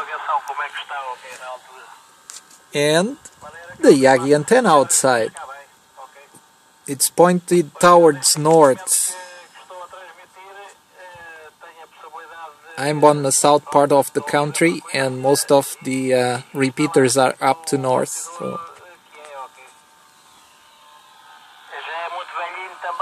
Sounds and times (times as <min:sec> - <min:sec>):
Speech: 0:00.0 - 0:02.0, 0:02.8 - 0:19.8, 0:21.8 - 0:23.0.